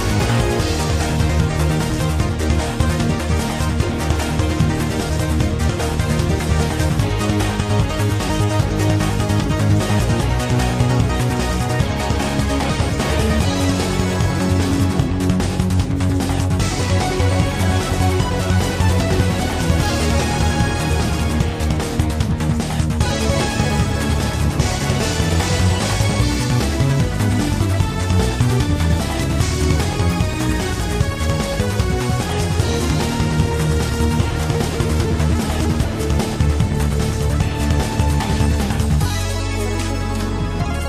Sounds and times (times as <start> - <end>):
Music: 0.0 - 40.8.